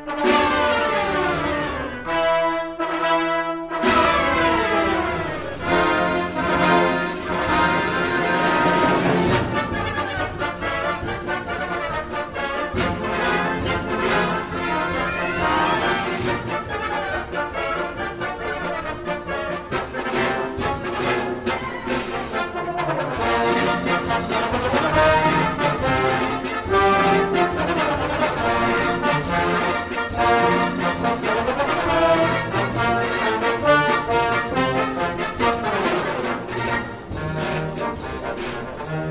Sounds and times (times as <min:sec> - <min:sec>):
Brass instrument: 0:00.0 - 0:39.1.